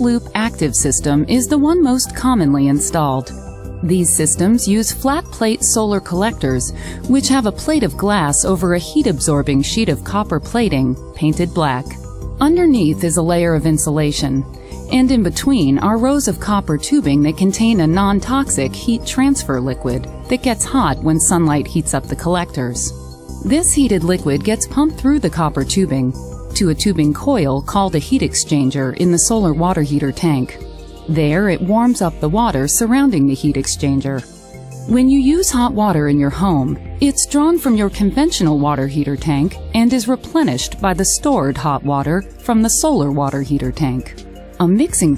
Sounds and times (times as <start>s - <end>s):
Speech: 0.0s - 34.2s, 34.9s - 45.1s
Music: 0.0s - 45.1s.